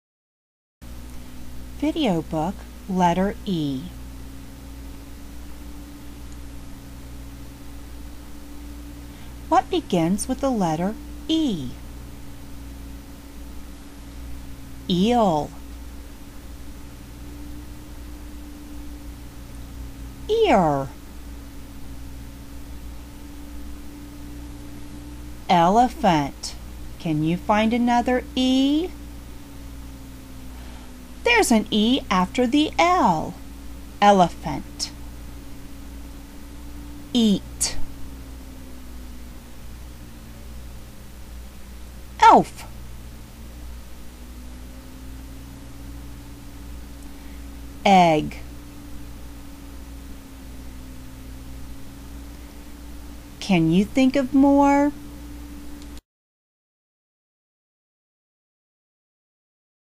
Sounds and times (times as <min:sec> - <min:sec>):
Speech: 0:01.8 - 0:03.9, 0:09.5 - 0:11.8, 0:14.9 - 0:15.6, 0:20.3 - 0:20.9, 0:25.5 - 0:28.9, 0:31.3 - 0:33.4, 0:34.0 - 0:34.9, 0:37.2 - 0:37.8, 0:42.2 - 0:42.7, 0:47.9 - 0:48.4, 0:53.4 - 0:55.0.